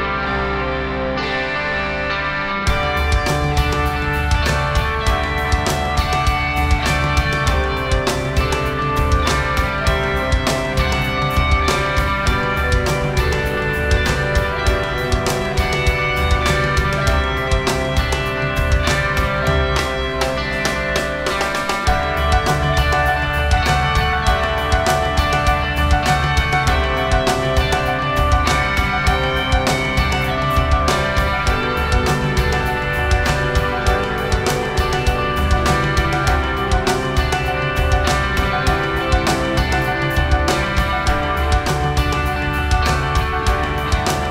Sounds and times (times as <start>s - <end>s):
Music: 0.0s - 44.3s.